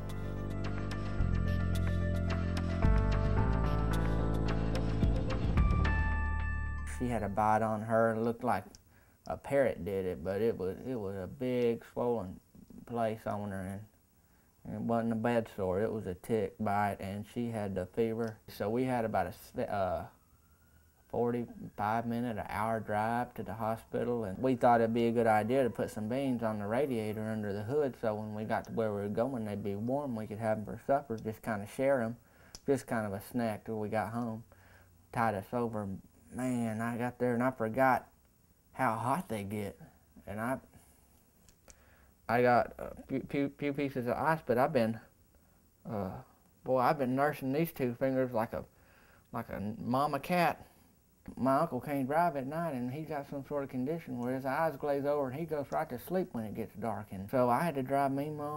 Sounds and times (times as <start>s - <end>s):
Speech: 6.9s - 14.0s, 14.6s - 20.2s, 21.1s - 34.5s, 35.1s - 38.1s, 38.8s - 40.8s, 42.3s - 45.1s, 45.8s - 48.7s, 49.3s - 50.7s, 51.3s - 58.5s.